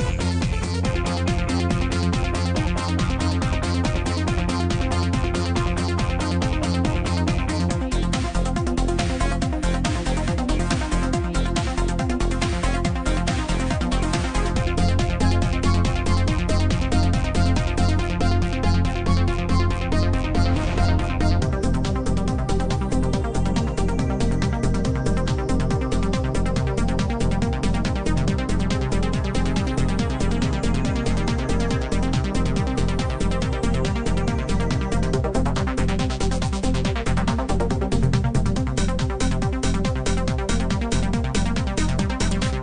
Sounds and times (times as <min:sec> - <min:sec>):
Music: 0:00.0 - 0:42.6.